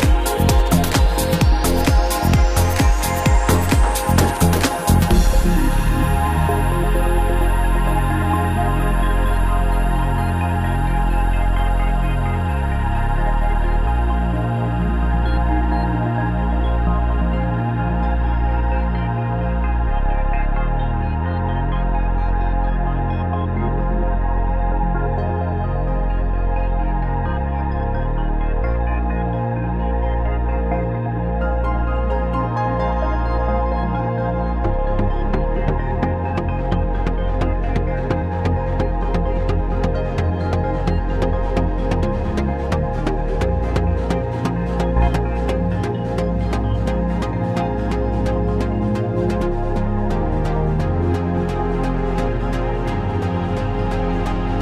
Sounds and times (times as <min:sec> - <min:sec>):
Ambient music: 0:00.0 - 0:54.6.